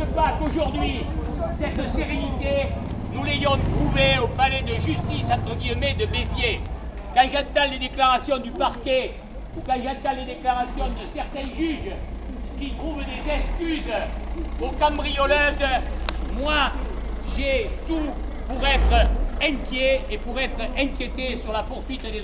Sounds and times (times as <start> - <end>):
Speech: 0.0 - 22.2.